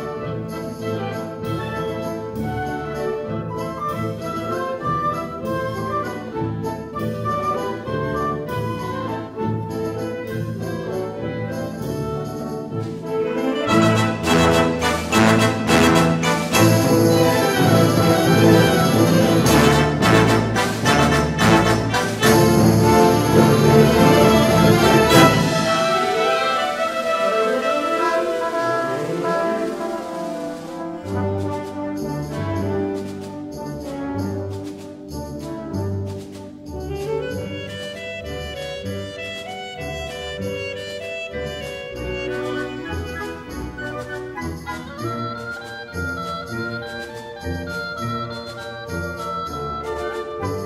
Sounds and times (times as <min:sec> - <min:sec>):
Brass instrument: 0:00.0 - 0:50.6.